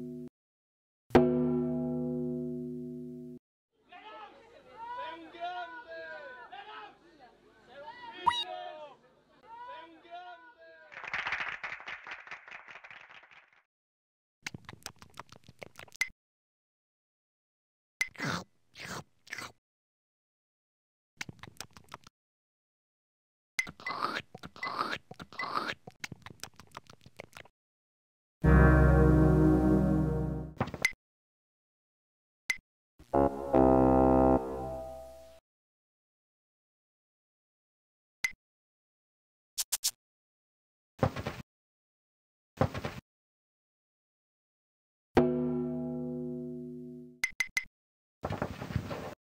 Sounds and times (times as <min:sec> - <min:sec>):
Oink: 0:18.2 - 0:19.5, 0:23.8 - 0:25.8.